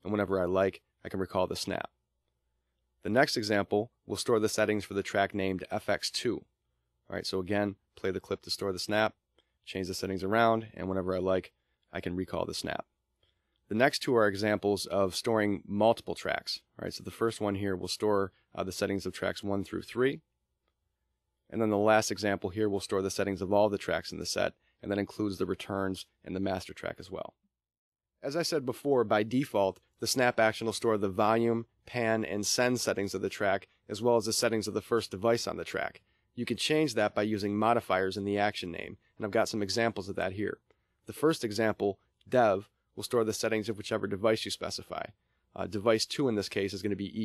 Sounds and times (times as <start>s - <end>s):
Speech: 0.0s - 2.0s, 3.0s - 12.9s, 13.7s - 20.3s, 21.5s - 27.4s, 28.2s - 47.2s.